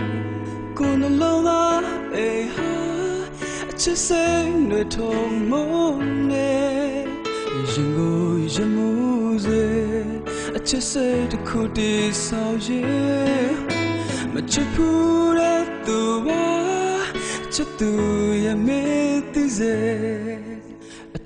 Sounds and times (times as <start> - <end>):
Music: 0.0 - 21.2.